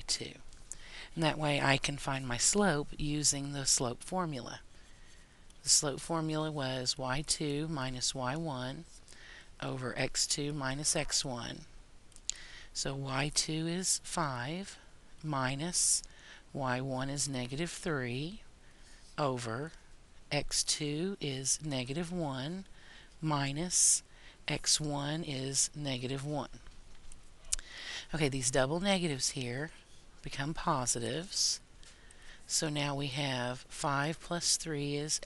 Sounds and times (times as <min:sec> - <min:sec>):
Speech: 0:00.0 - 0:00.4, 0:01.2 - 0:04.6, 0:05.7 - 0:08.9, 0:09.6 - 0:11.7, 0:12.8 - 0:16.0, 0:16.6 - 0:18.4, 0:19.2 - 0:22.6, 0:23.2 - 0:26.6, 0:28.1 - 0:31.6, 0:32.5 - 0:35.2.